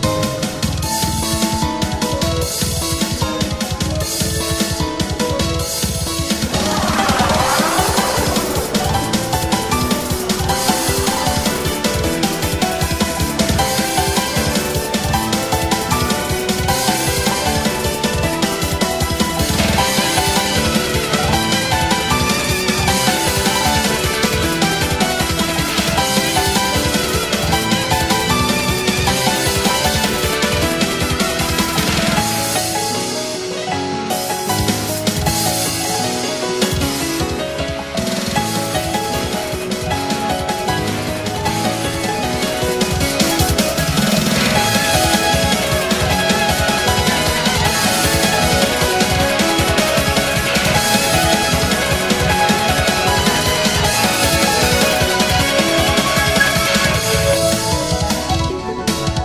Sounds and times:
Music: 0.0s - 59.2s.

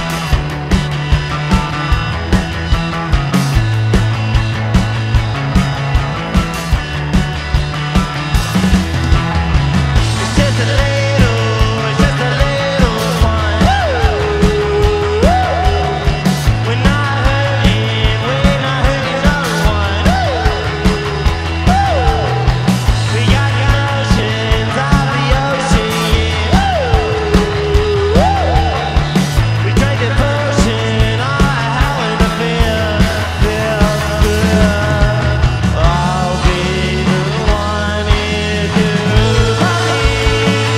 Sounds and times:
Music: 0.0s - 40.7s.

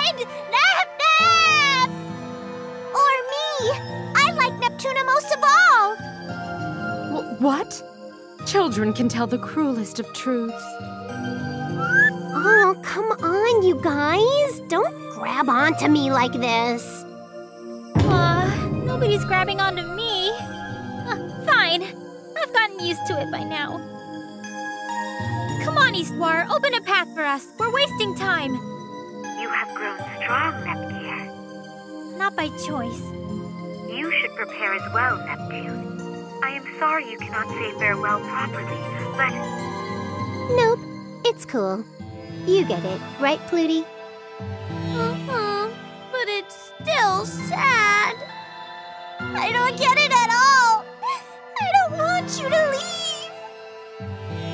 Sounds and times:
Music: 0.0s - 54.5s.

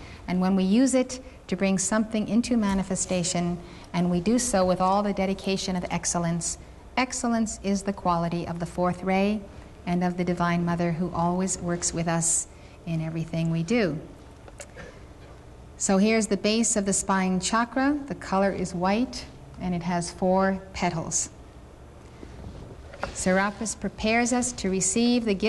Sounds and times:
Inside, large room or hall: 0.0s - 25.4s
Speech: 0.3s - 14.1s, 15.8s - 21.4s, 23.1s - 25.4s.

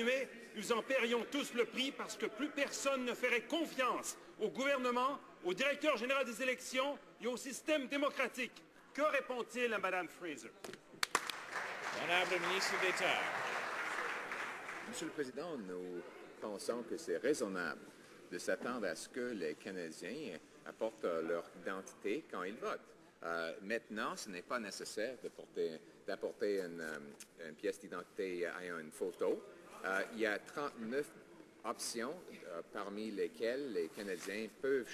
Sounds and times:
Speech: 0.0s - 10.6s, 12.0s - 13.4s, 14.9s - 34.9s.

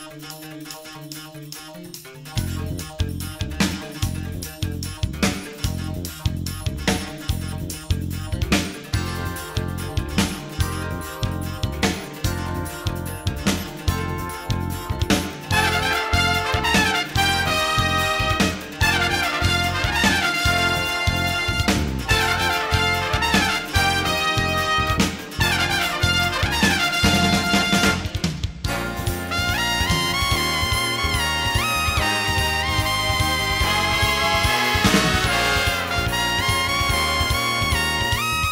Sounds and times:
Trumpet: 8.9s - 38.5s.

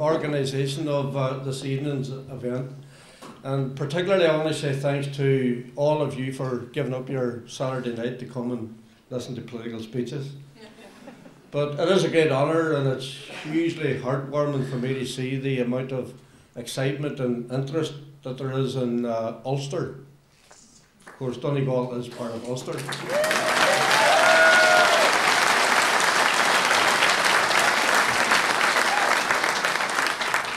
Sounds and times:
Male speech, man speaking: 0.0s - 2.8s, 3.4s - 10.4s, 11.6s - 20.0s, 21.2s - 23.0s
Narration, monologue: 0.0s - 23.1s.

